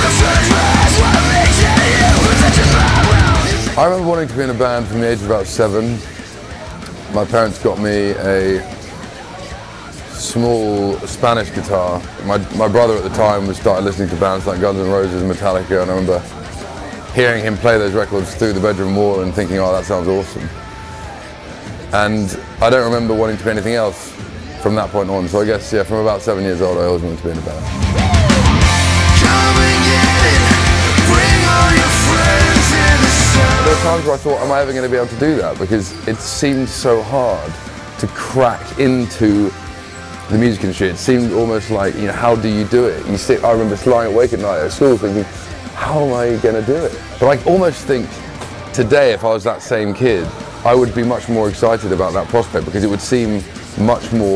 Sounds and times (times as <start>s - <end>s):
Speech: 0.0s - 20.6s, 21.9s - 27.7s, 33.3s - 39.6s, 40.3s - 54.3s
Music: 0.0s - 54.3s.